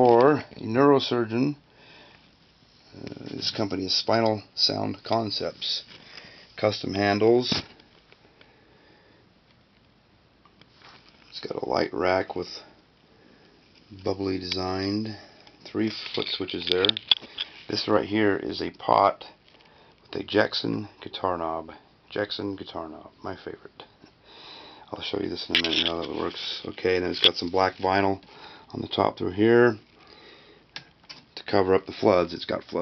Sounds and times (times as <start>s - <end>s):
Speech: 0.0s - 1.6s, 2.9s - 5.9s, 6.6s - 7.7s, 11.3s - 12.7s, 13.9s - 17.0s, 17.7s - 19.4s, 20.1s - 23.9s, 24.9s - 29.8s, 31.4s - 32.8s.